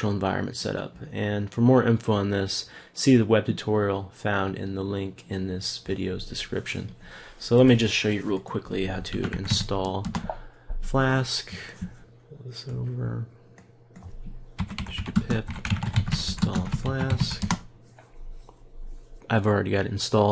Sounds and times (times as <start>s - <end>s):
Speech: 0.0s - 10.2s, 10.8s - 13.4s, 14.9s - 17.5s, 19.2s - 20.3s.